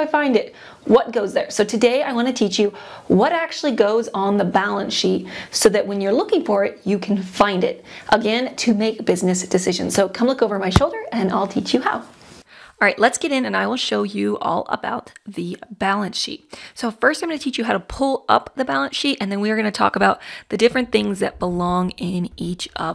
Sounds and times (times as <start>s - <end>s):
Speech: 0.0s - 12.1s, 12.8s - 22.9s
Inside, small room: 0.0s - 22.9s.